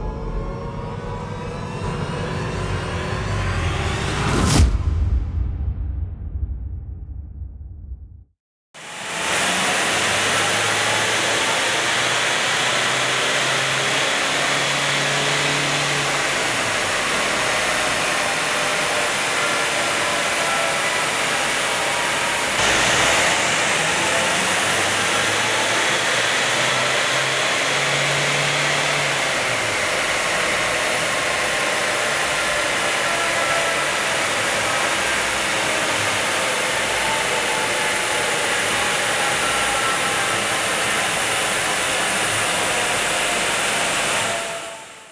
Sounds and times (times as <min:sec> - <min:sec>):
Car: 0:08.8 - 0:45.1
Medium engine (mid frequency): 0:08.8 - 0:45.1
Accelerating, revving, vroom: 0:09.0 - 0:44.6.